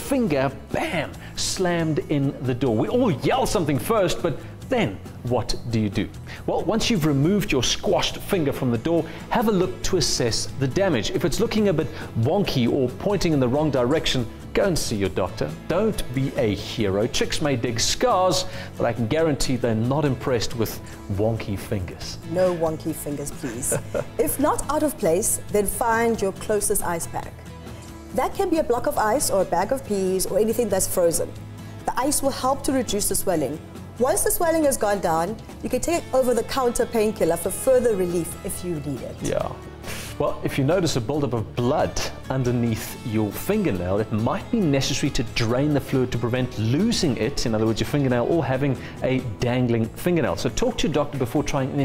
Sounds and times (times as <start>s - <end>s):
Music: 0.0s - 51.8s.